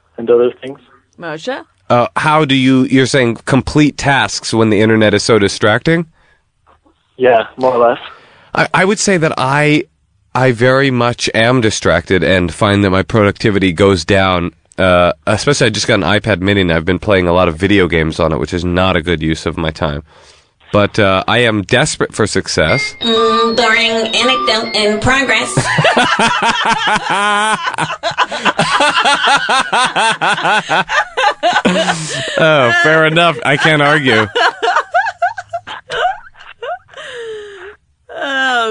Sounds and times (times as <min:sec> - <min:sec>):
Speech: 0:00.2 - 0:06.1, 0:07.2 - 0:20.0, 0:20.7 - 0:25.5, 0:32.4 - 0:34.3.